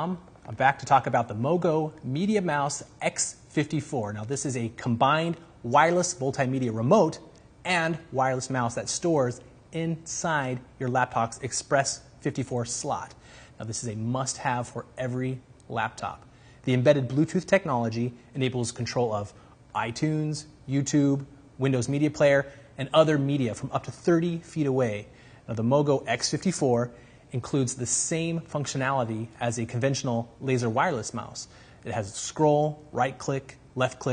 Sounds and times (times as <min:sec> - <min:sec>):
Speech: 0:00.0 - 0:34.1.